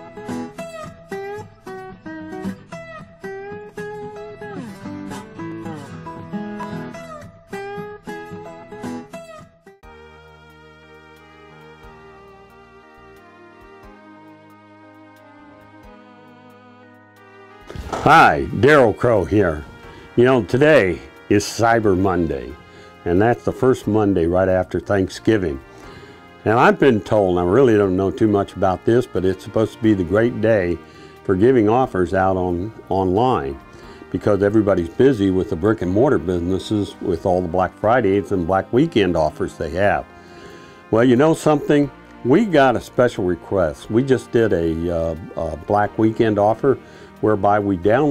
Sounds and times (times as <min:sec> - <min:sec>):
Music: 0:00.0 - 0:48.1
Speech: 0:18.0 - 0:25.6, 0:26.4 - 0:40.0, 0:40.9 - 0:48.1.